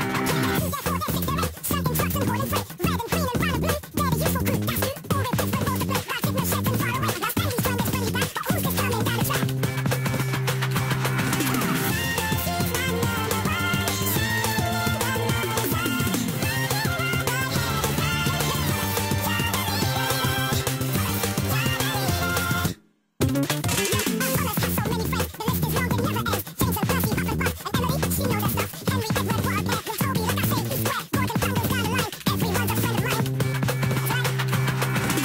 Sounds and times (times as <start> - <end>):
Music: 0.0 - 35.2.